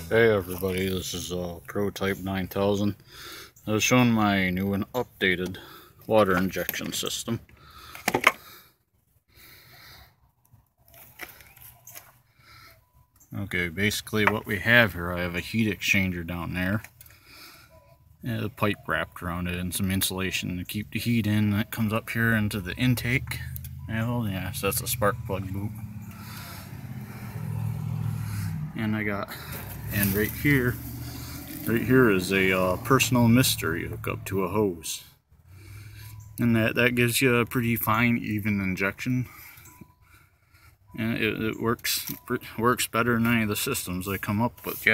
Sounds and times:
Speech: 0.0s - 3.0s, 3.6s - 7.4s, 13.3s - 16.8s, 18.2s - 25.7s, 28.8s - 30.8s, 31.6s - 35.2s, 36.4s - 39.3s, 41.0s - 44.9s.

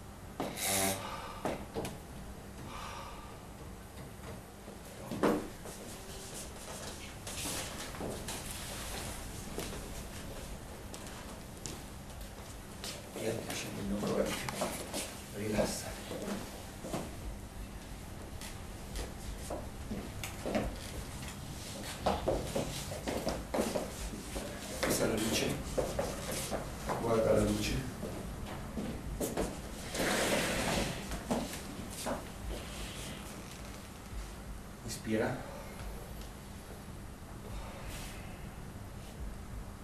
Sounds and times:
Speech: 13.2s - 14.5s, 15.4s - 16.0s, 24.9s - 25.6s, 34.8s - 35.4s.

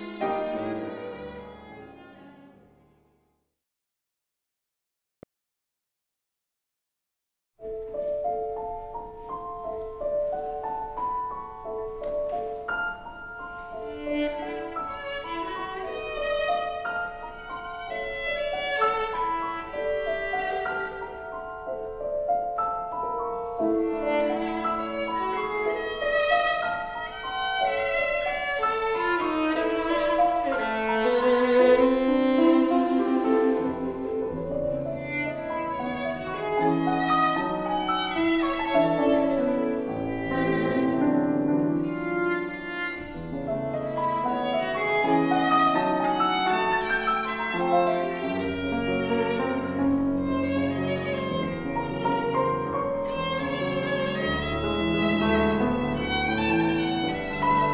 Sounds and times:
Violin, fiddle: 0.0s - 2.9s, 9.7s - 57.7s.

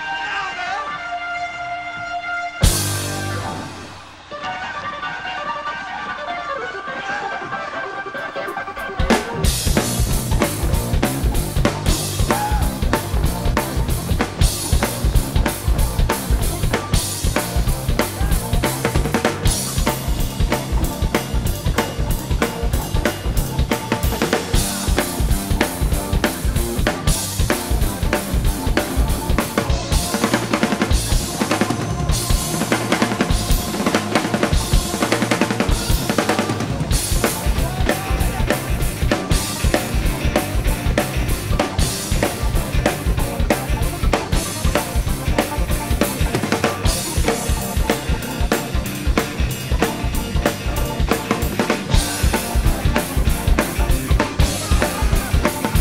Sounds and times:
Exciting music: 1.1s - 7.0s, 8.1s - 55.8s
Drum kit: 2.6s - 4.3s, 8.5s - 55.8s.

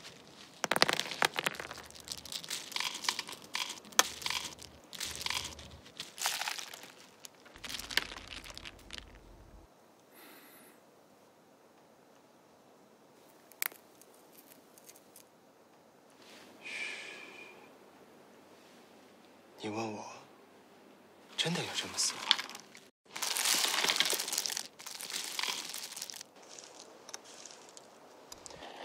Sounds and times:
Speech: 19.6s - 20.3s, 21.4s - 22.2s.

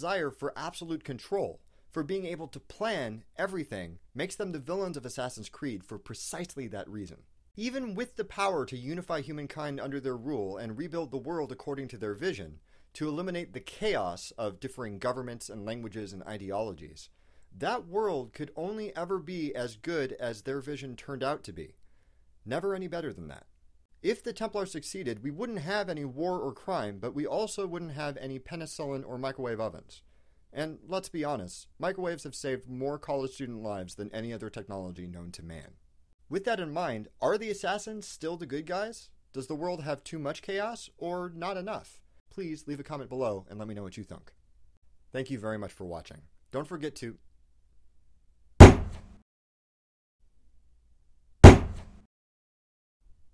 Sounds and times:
Speech: 0.0s - 21.8s, 22.5s - 44.4s, 45.2s - 47.2s
Thunk: 48.6s - 49.2s, 51.4s - 52.0s.

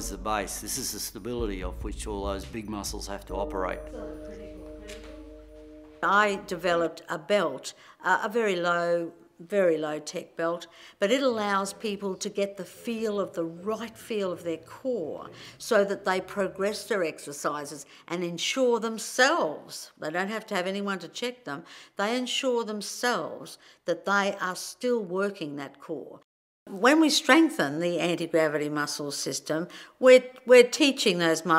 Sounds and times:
Speech: 0.0s - 4.5s, 6.0s - 31.5s.

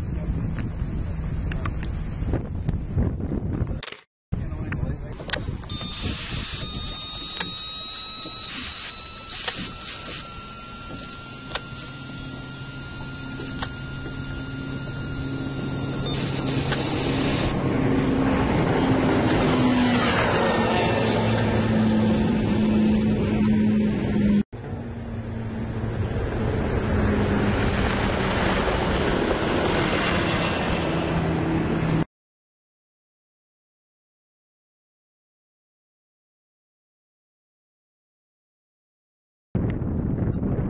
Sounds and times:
Motorboat, speedboat: 0.0s - 2.9s, 9.5s - 32.0s.

